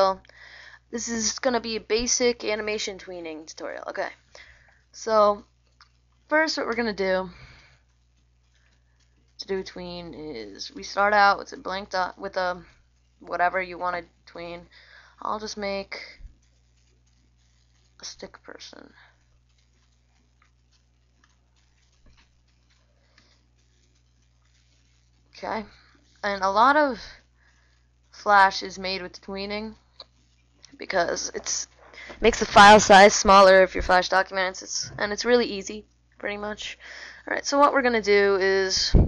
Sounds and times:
Speech: 0:00.0 - 0:00.2, 0:01.0 - 0:04.2, 0:05.0 - 0:05.4, 0:06.3 - 0:07.4, 0:09.4 - 0:12.6, 0:13.2 - 0:16.2, 0:18.0 - 0:19.0, 0:25.4 - 0:25.7, 0:26.3 - 0:27.2, 0:28.2 - 0:29.8, 0:30.8 - 0:39.0.

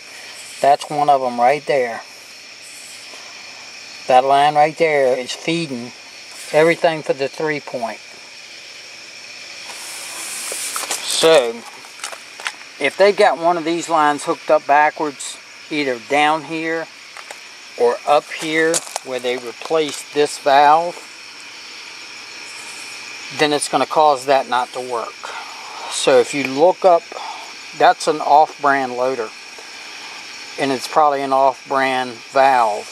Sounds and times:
Speech: 0:00.6 - 0:02.0, 0:04.1 - 0:05.9, 0:06.5 - 0:08.0, 0:11.0 - 0:11.6, 0:12.8 - 0:16.9, 0:17.8 - 0:21.0, 0:23.3 - 0:29.3, 0:30.6 - 0:32.9.

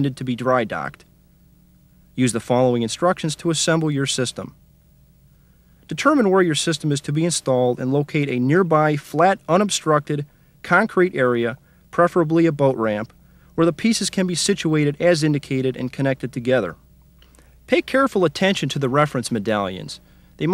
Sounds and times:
Speech: 0:00.0 - 0:01.1, 0:02.2 - 0:04.6, 0:05.9 - 0:16.8, 0:17.7 - 0:20.5.

